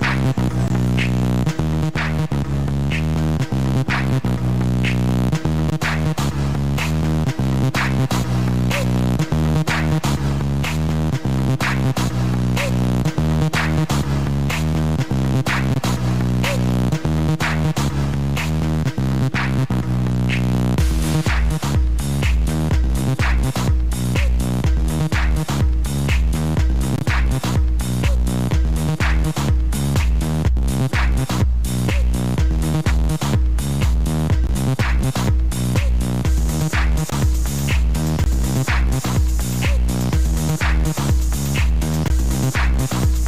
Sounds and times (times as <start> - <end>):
Independent music: 0.0 - 43.2.